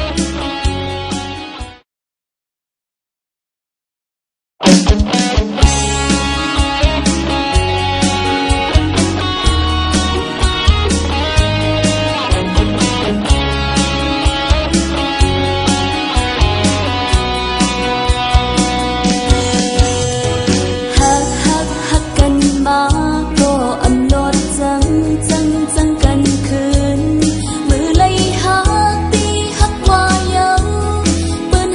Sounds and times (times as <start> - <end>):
Music: 0.0 - 1.8, 4.6 - 31.7.